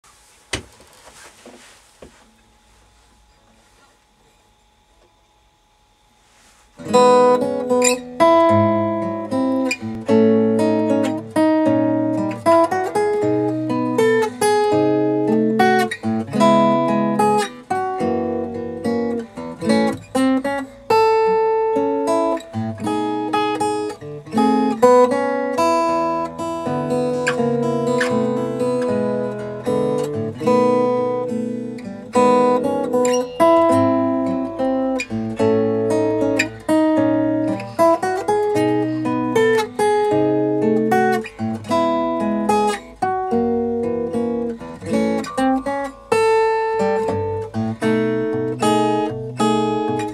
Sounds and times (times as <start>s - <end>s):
Acoustic guitar: 6.2s - 50.1s.